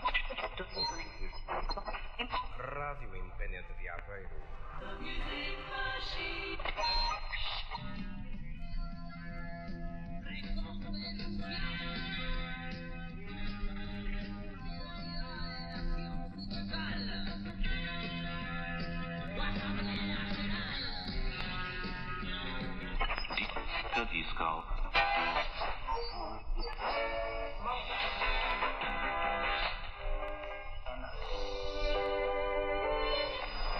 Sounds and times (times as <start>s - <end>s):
Speech: 0.0s - 1.6s, 2.2s - 5.3s, 23.4s - 25.0s
Music: 3.8s - 33.7s.